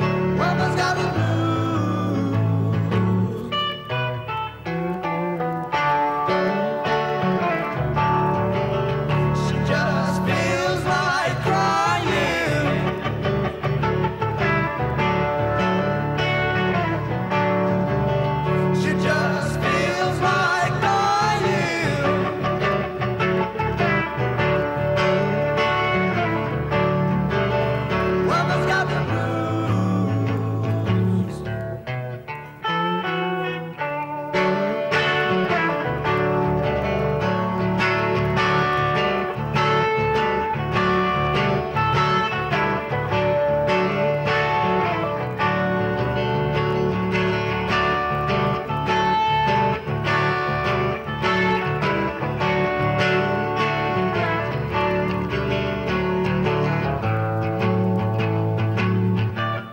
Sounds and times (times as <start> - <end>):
Music: 0.0 - 59.7.